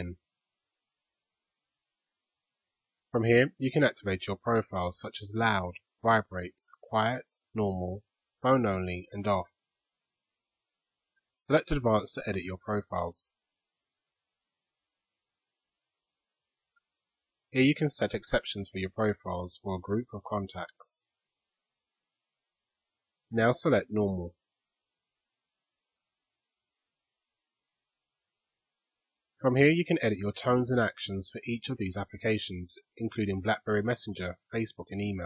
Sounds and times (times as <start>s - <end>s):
Speech: 0.0s - 0.2s, 3.2s - 9.6s, 11.4s - 13.4s, 17.5s - 21.1s, 23.3s - 24.4s, 29.4s - 35.2s.